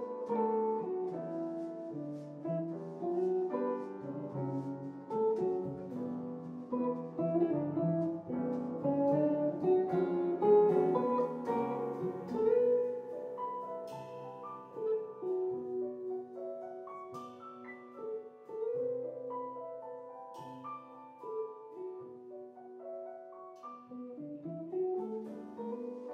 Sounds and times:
Music: 0.0s - 26.1s.

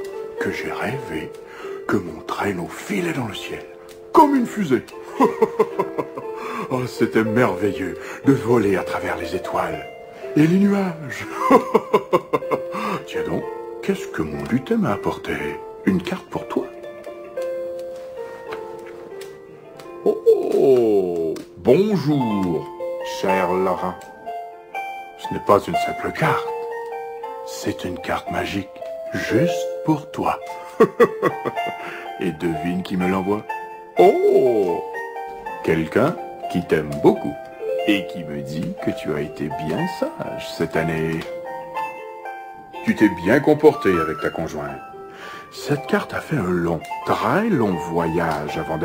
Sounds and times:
Music: 0.0s - 48.8s
Speech: 0.4s - 1.3s, 1.9s - 4.9s, 6.7s - 9.8s, 10.4s - 11.3s, 13.1s - 16.7s, 20.2s - 24.0s, 25.2s - 26.5s, 27.5s - 30.4s, 32.2s - 34.8s, 35.6s - 41.3s, 42.8s - 44.8s, 45.6s - 48.8s.

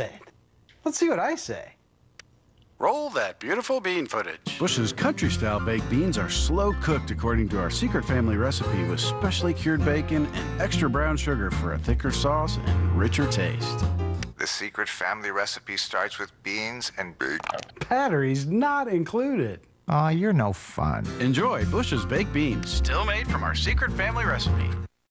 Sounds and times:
Speech: 2.8s - 13.8s, 14.4s - 24.9s
Music: 4.0s - 14.4s, 20.7s - 25.0s.

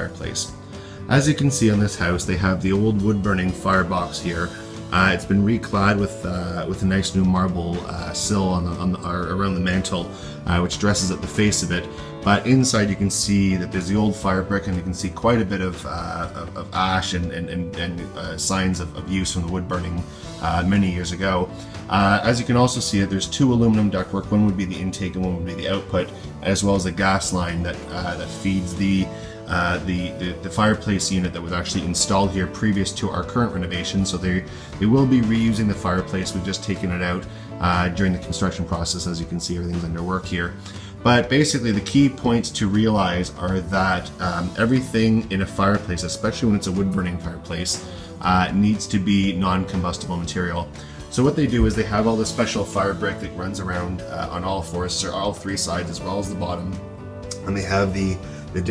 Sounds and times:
Music: 0.0s - 58.7s
Speech: 0.0s - 58.7s.

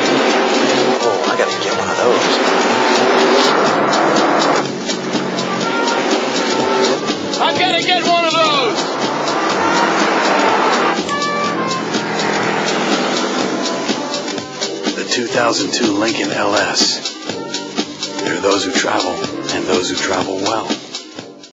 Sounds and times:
Vehicle: 0.0s - 15.0s
Music: 0.0s - 21.5s
Speech: 1.2s - 3.5s, 7.4s - 8.8s, 15.0s - 17.0s, 18.2s - 20.8s.

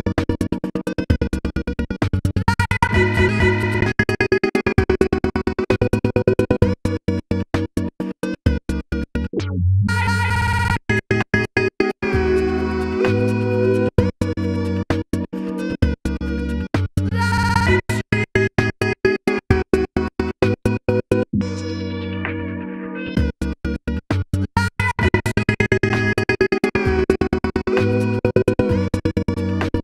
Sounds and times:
Electronic music: 0.0s - 24.0s, 24.6s - 29.8s.

